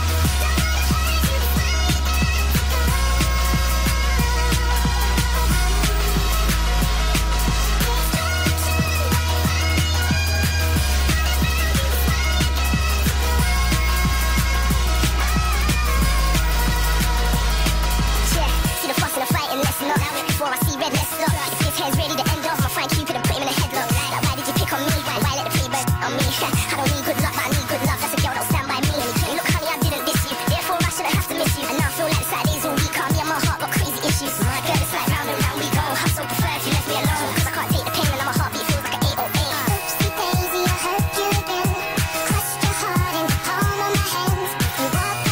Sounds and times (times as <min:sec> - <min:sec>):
Music: 0:00.0 - 0:45.3.